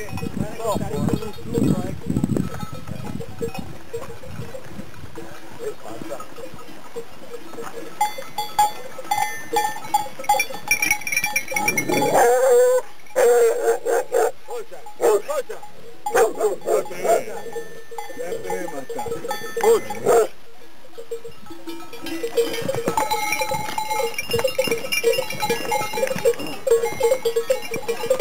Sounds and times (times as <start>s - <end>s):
Bow-wow: 11.9s - 14.4s, 15.0s - 15.3s, 16.1s - 17.3s, 19.6s - 20.4s.